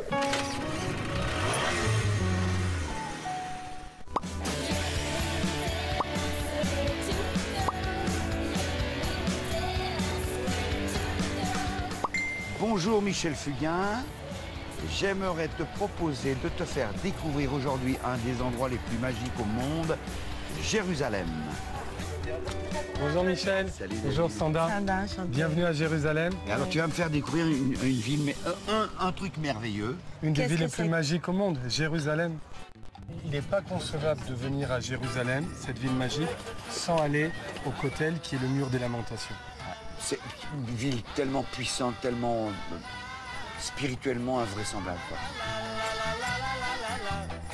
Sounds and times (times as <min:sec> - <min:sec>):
Music: 0:00.0 - 0:47.5.